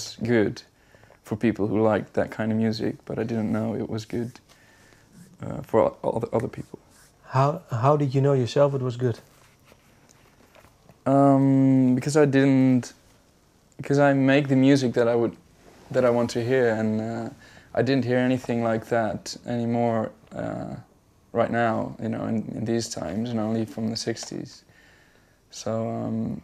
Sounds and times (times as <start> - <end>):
Speech: 0.0 - 4.5, 5.2 - 9.3, 11.0 - 13.0, 13.8 - 24.7, 25.5 - 26.4
Inside, small room: 0.0 - 26.4.